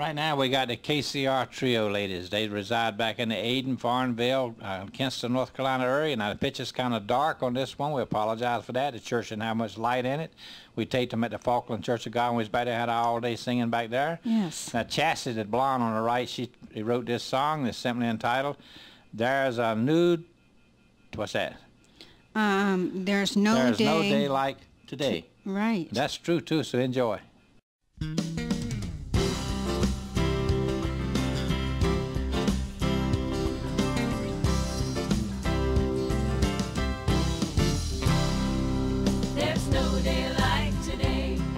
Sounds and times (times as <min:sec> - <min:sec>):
Speech: 0:00.0 - 0:18.6, 0:19.2 - 0:20.3, 0:22.4 - 0:27.3
Tender music: 0:28.0 - 0:41.5.